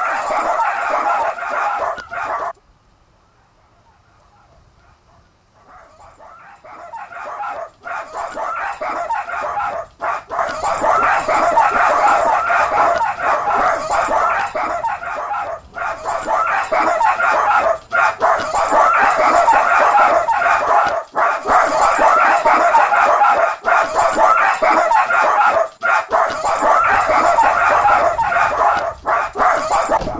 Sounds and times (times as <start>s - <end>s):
Bow-wow: 0.0s - 2.6s, 4.3s - 30.1s.